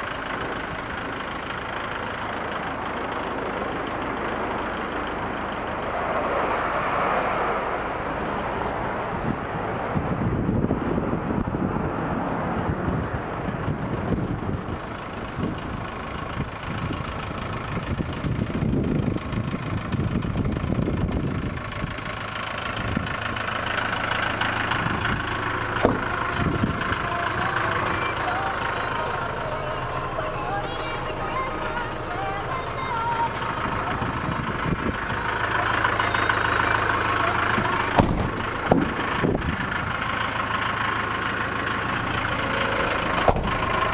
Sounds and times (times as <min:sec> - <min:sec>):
Vehicle: 0:00.0 - 0:43.9.